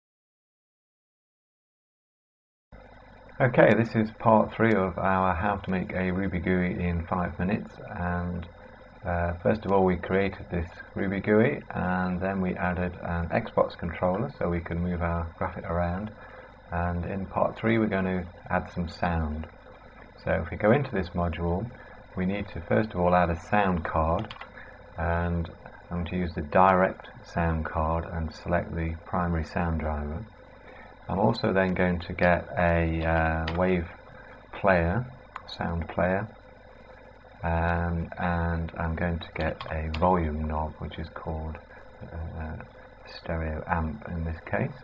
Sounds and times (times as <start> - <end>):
Speech: 3.4 - 8.5, 9.1 - 19.5, 20.2 - 24.4, 25.0 - 30.3, 31.1 - 34.0, 34.6 - 36.4, 37.4 - 44.8.